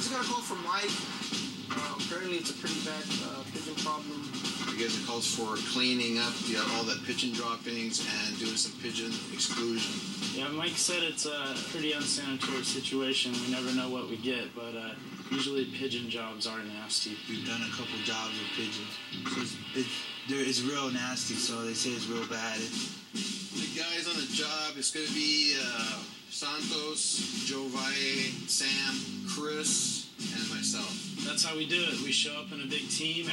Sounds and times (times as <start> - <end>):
Speech: 0.0 - 1.1, 1.7 - 22.8, 23.6 - 33.3
Music: 0.0 - 33.3.